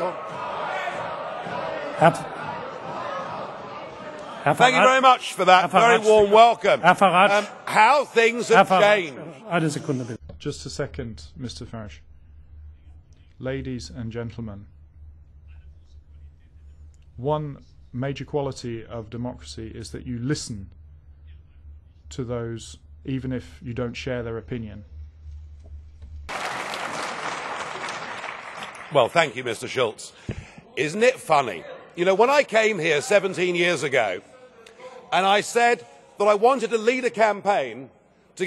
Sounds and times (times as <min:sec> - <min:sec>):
Male speech, man speaking: 0:00.0 - 0:00.2, 0:01.8 - 0:02.3, 0:04.2 - 0:12.0, 0:13.3 - 0:14.8, 0:16.2 - 0:20.8, 0:22.1 - 0:24.9, 0:28.9 - 0:38.4
Narration, monologue: 0:04.3 - 0:26.3, 0:28.5 - 0:38.4.